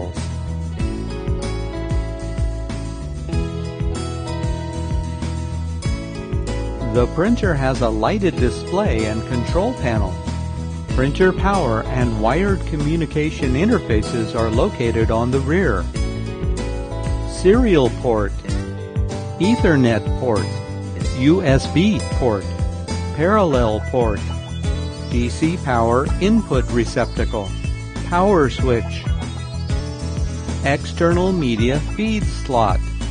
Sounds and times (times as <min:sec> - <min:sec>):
Music: 0:00.0 - 0:33.1
Speech: 0:07.0 - 0:10.2, 0:11.0 - 0:15.8, 0:17.4 - 0:18.6, 0:19.4 - 0:22.5, 0:23.2 - 0:24.2, 0:25.2 - 0:27.5, 0:28.1 - 0:29.1, 0:30.6 - 0:32.8.